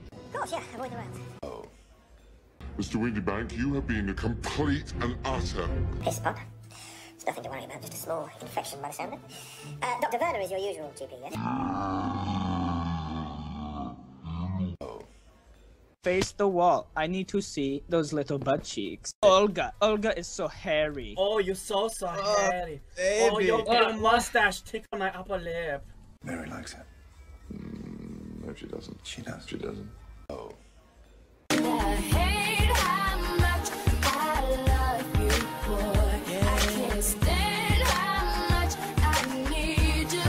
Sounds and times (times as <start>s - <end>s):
Music: 0.0s - 11.4s, 15.0s - 24.2s, 24.9s - 40.2s.